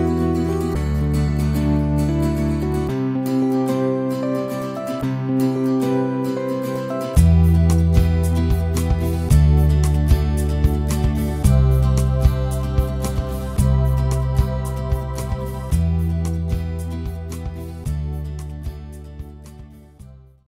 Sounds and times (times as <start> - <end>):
Music: 0.0 - 20.5.